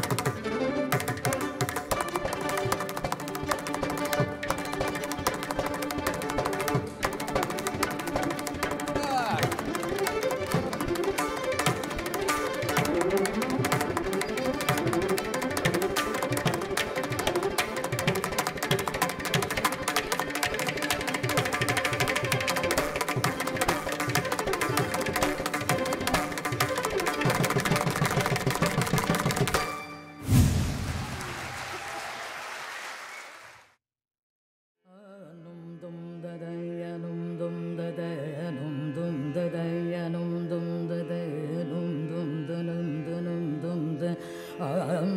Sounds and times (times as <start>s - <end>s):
Violin, fiddle: 0.0s - 30.2s.